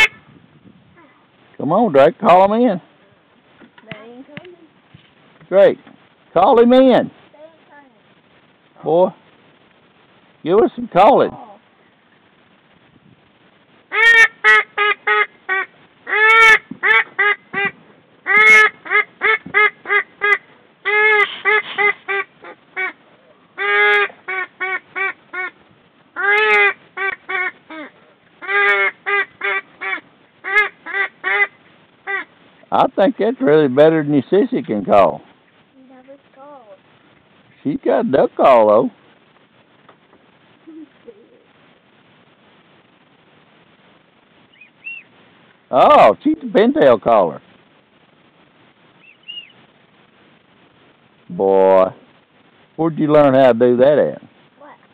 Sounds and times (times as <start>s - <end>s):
Quack: 0.0s - 0.2s, 13.9s - 23.0s, 23.6s - 25.6s, 26.2s - 32.3s.